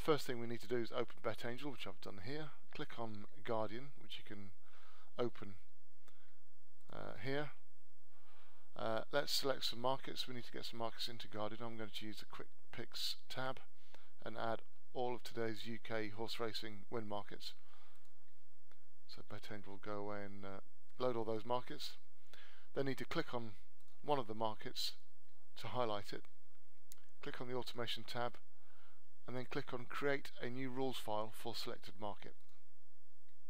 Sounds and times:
Speech: 0.0 - 4.6, 5.2 - 5.6, 6.9 - 7.6, 8.8 - 17.6, 19.1 - 22.0, 22.8 - 25.0, 25.6 - 26.3, 27.2 - 28.4, 29.3 - 32.4.

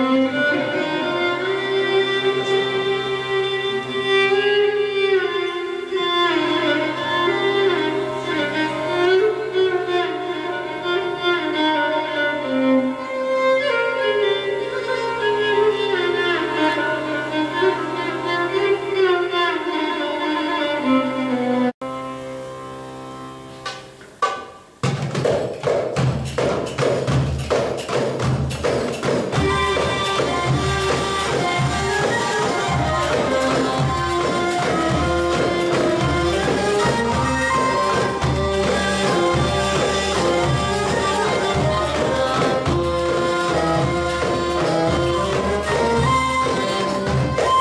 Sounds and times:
Violin, fiddle: 0.0 - 23.4, 29.4 - 47.6
String section: 0.0 - 24.8, 26.7 - 47.6.

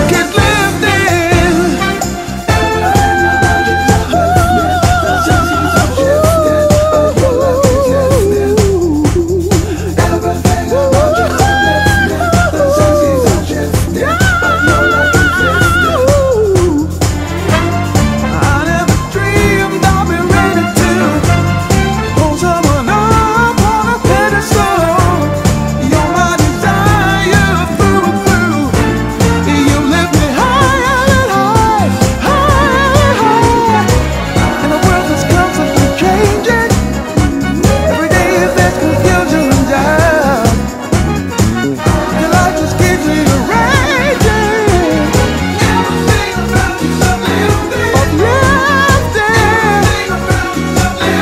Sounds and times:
Singing: 0.0 - 40.9, 41.8 - 51.2
Hip hop music: 0.0 - 51.2.

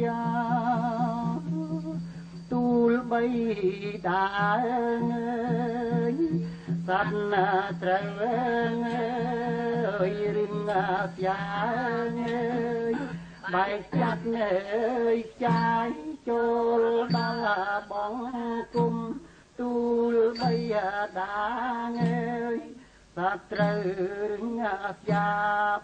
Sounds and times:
Music: 0.0 - 21.2, 21.9 - 22.8, 23.4 - 25.8.

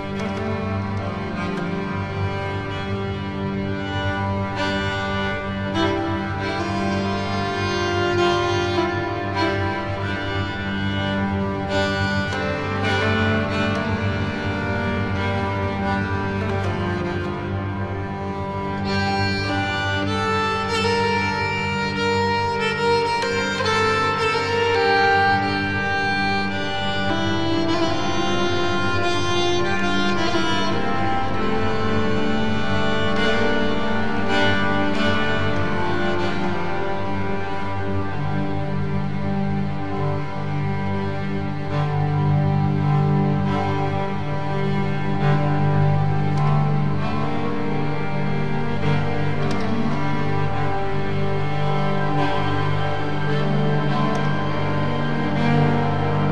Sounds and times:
Music: 0.0 - 56.3.

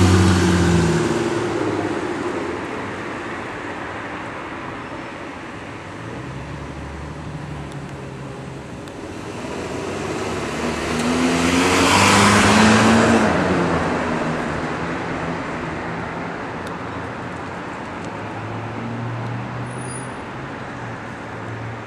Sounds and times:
Car passing by: 9.1 - 15.7.

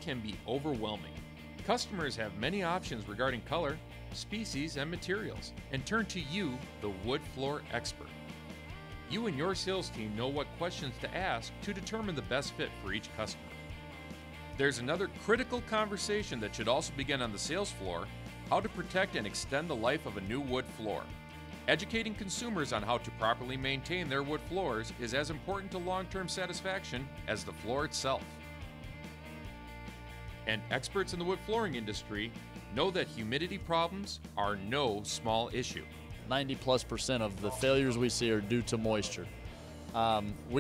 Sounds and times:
Speech: 0.0 - 8.1, 9.1 - 13.4, 14.6 - 21.1, 21.7 - 28.3, 30.5 - 40.6
Music: 0.0 - 40.6.

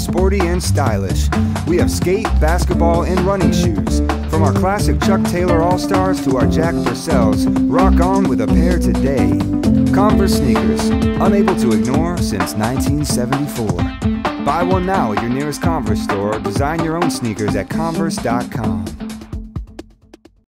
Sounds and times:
Speech: 0.0 - 13.9, 14.5 - 19.0
Music: 0.0 - 20.4.

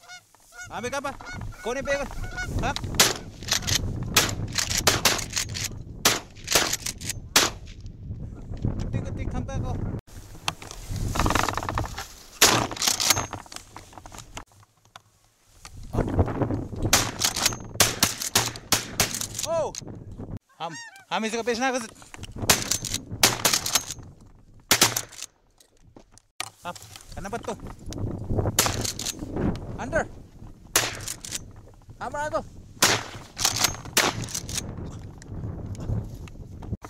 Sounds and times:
Speech: 0.7 - 2.8, 8.9 - 9.8, 19.4 - 19.8, 20.6 - 22.0, 26.6 - 27.6, 29.8 - 30.1, 32.0 - 32.5
Gunshot, gunfire: 7.4 - 7.6, 32.8 - 33.2.

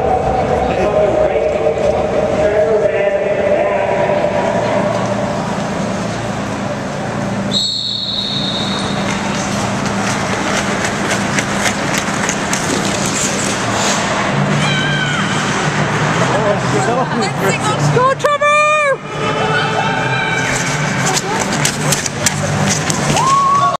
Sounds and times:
Run: 8.4 - 13.7, 20.4 - 23.7.

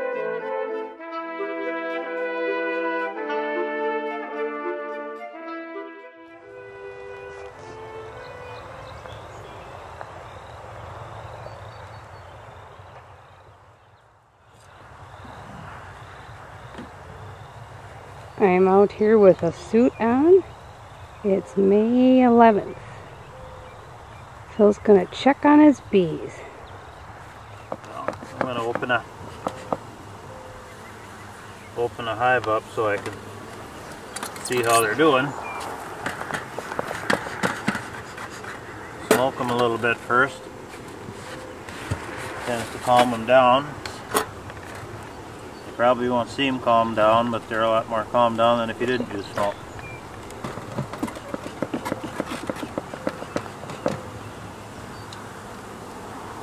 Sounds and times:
Speech: 27.9 - 29.0, 34.4 - 35.4.

